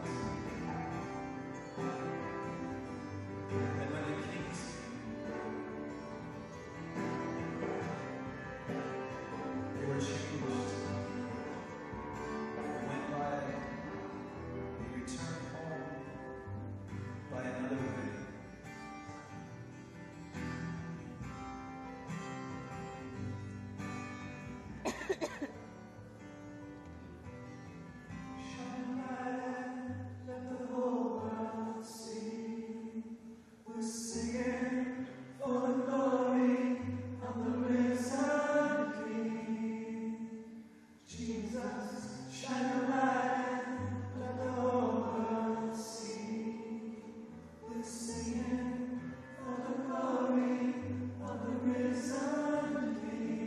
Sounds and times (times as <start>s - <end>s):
Music: 0.0s - 53.4s
Male singing: 3.7s - 5.0s, 8.7s - 11.6s, 12.7s - 13.9s, 14.8s - 16.2s, 17.3s - 18.4s, 28.4s - 40.5s, 41.1s - 53.4s.